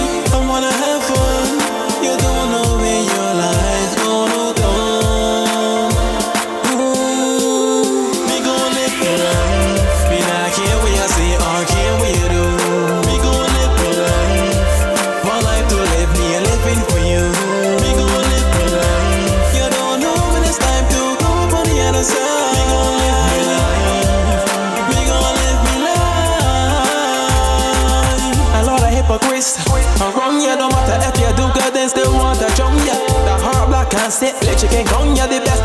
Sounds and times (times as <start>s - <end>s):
Blues: 0.0s - 35.6s.